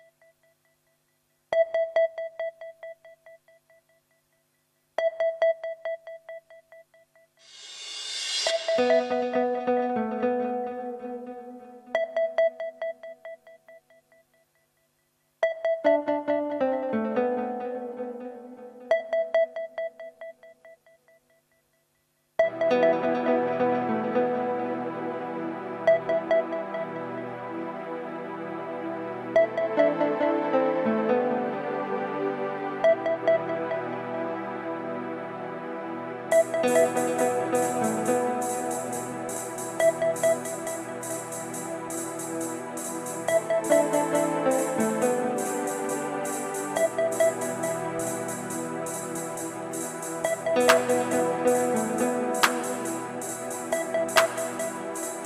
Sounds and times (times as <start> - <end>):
Music: 1.5 - 4.4, 5.0 - 21.8, 22.4 - 55.2.